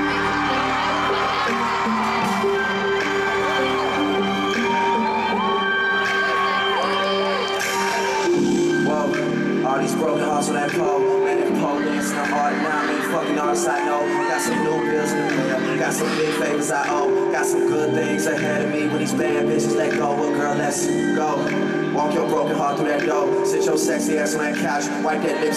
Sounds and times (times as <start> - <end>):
Singing: 0.0 - 25.5.